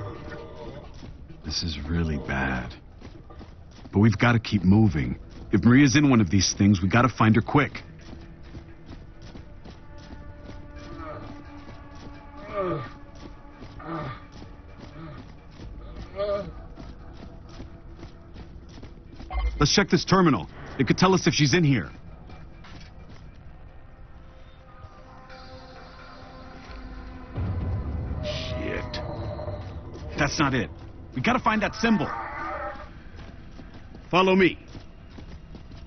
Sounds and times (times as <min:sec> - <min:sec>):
Speech: 0:03.9 - 0:07.8, 0:19.5 - 0:21.9, 0:30.1 - 0:32.2.